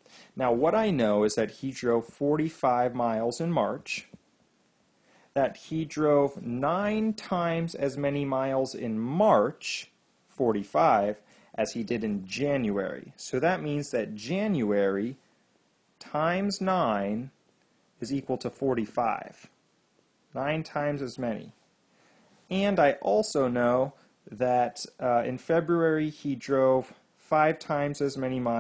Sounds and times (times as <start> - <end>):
Narration, monologue: 0.0 - 28.6.